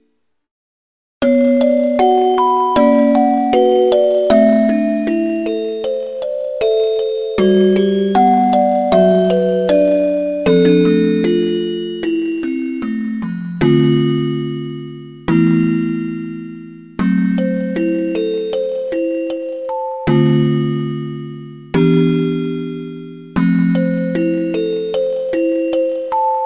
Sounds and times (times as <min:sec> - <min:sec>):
Music: 0:01.2 - 0:26.4.